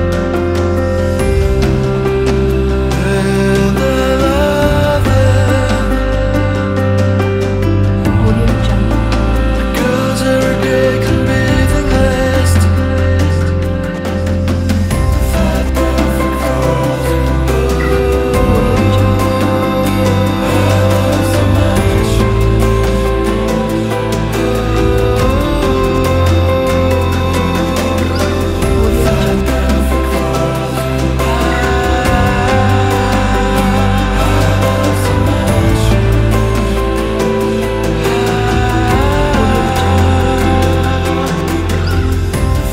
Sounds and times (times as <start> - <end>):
Happy music: 0.0 - 42.7.